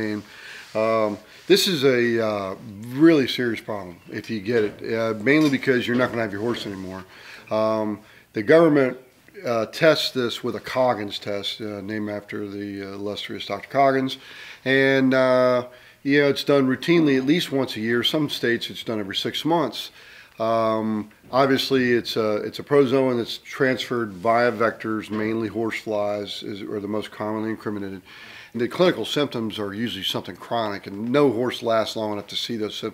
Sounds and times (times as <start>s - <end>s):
Speech: 0.0s - 32.9s.